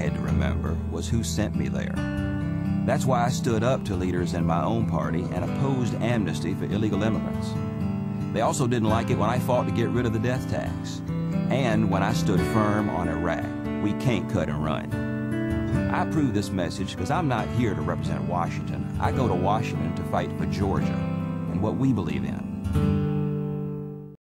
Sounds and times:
Speech: 0.0s - 2.0s, 2.9s - 7.6s, 8.4s - 15.0s, 15.8s - 22.5s
Music: 0.0s - 24.2s.

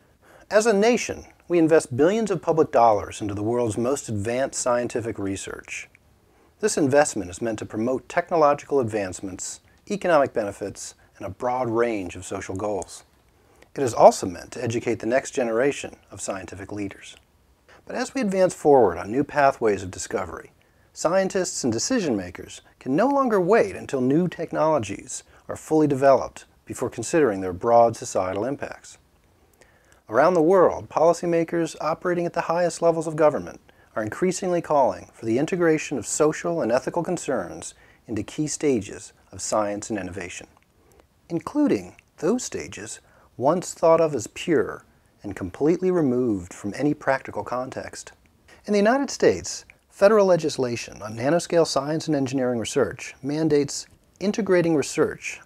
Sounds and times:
Speech: 0.4s - 6.0s, 6.6s - 13.1s, 13.7s - 17.2s, 17.8s - 29.0s, 30.0s - 40.6s, 41.3s - 55.4s.

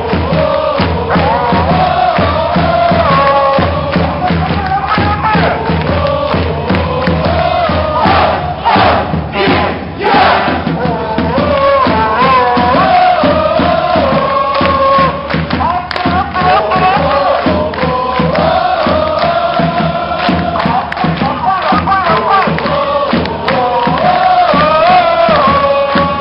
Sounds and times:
Crowd: 0.0s - 26.2s.

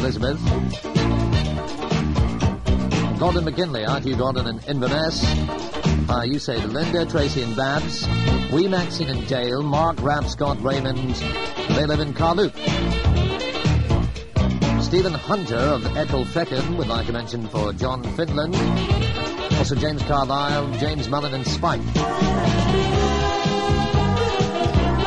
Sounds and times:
Speech: 0.0s - 0.5s, 3.2s - 5.4s, 6.1s - 12.6s, 14.8s - 18.7s, 19.6s - 21.8s
Music: 0.0s - 25.0s.

